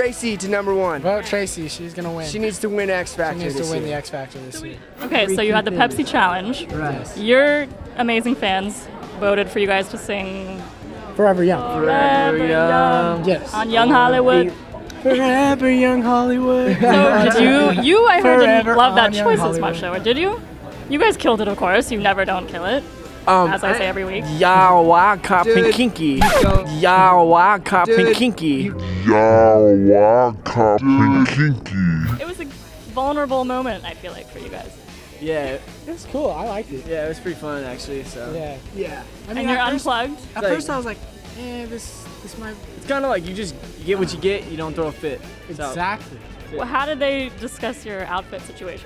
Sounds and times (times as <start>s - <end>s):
Pop music: 4.6s - 6.7s, 16.7s - 22.3s, 23.2s - 34.6s, 39.3s - 42.5s
Speech: 23.5s - 32.5s.